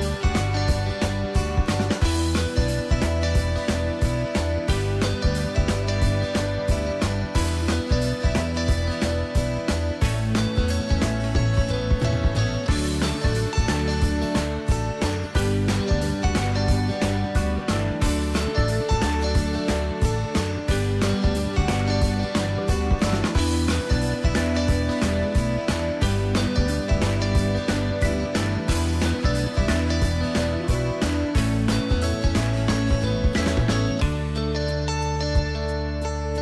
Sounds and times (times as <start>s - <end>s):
Music: 0.0s - 36.4s.